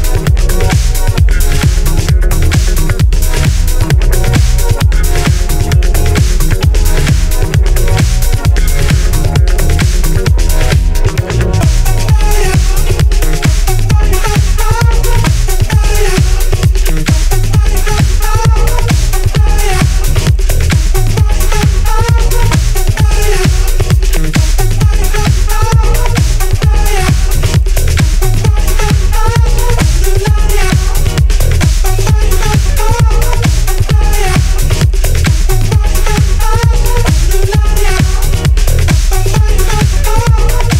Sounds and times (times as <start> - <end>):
Funk: 0.0 - 40.7.